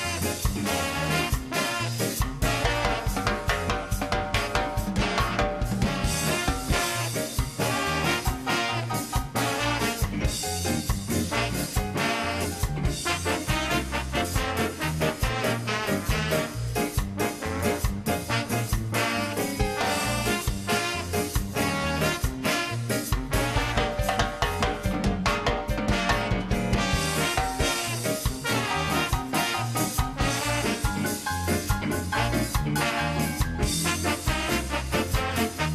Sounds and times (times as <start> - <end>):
Music: 0.0 - 35.7.